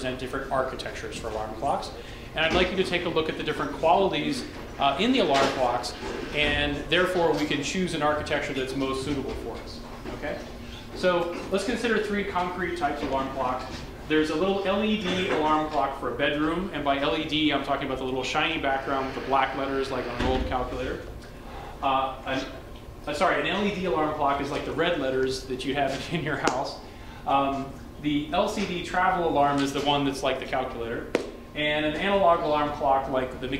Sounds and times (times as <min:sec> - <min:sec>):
Speech: 0:00.0 - 0:21.1, 0:21.8 - 0:33.5.